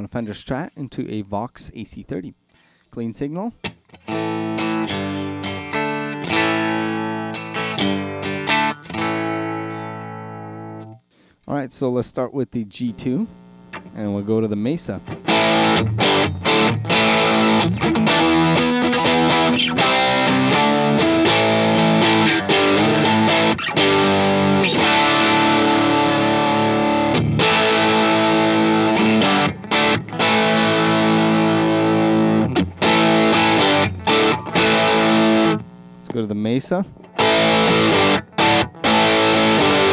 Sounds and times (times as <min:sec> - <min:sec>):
Tapping (guitar technique): 0:03.6 - 0:11.0, 0:12.8 - 0:36.2, 0:36.8 - 0:39.9
Electric guitar: 0:03.6 - 0:11.1, 0:14.8 - 0:36.1, 0:36.8 - 0:39.9.